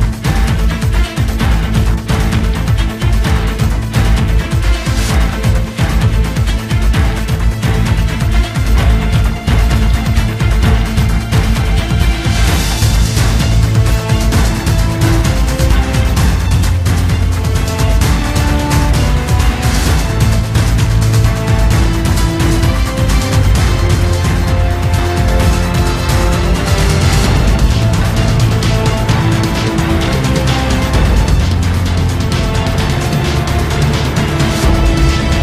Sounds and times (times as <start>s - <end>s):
Music: 0.0s - 35.4s.